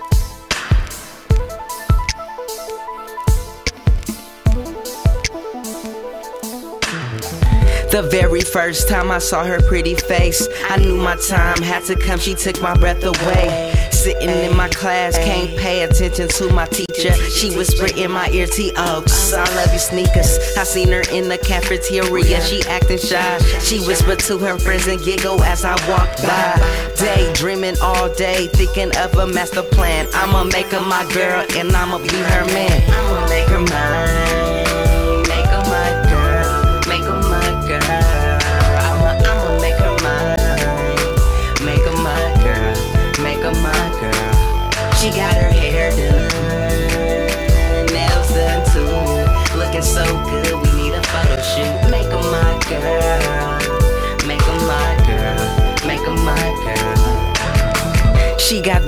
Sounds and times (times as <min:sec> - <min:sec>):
Pop music: 0:00.0 - 0:58.8.